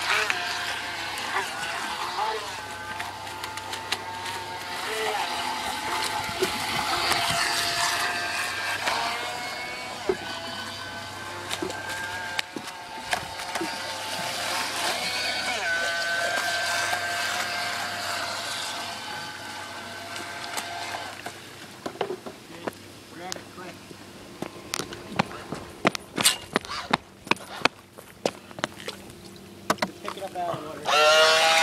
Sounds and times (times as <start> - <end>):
Motorboat, speedboat: 0.0 - 26.1, 27.0 - 31.6.